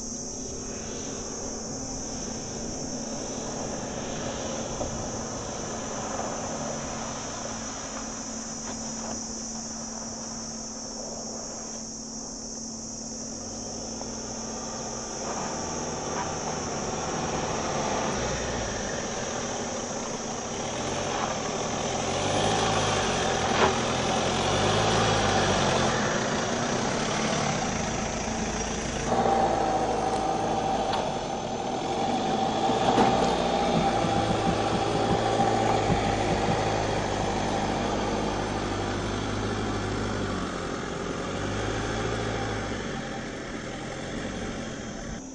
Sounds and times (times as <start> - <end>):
Car: 0.0 - 45.3
Outside, rural or natural: 0.0 - 45.3.